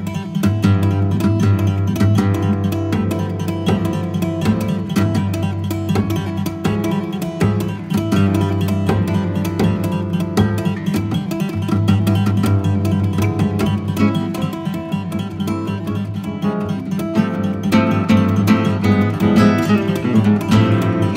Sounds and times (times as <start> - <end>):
Acoustic guitar: 0.0 - 21.1.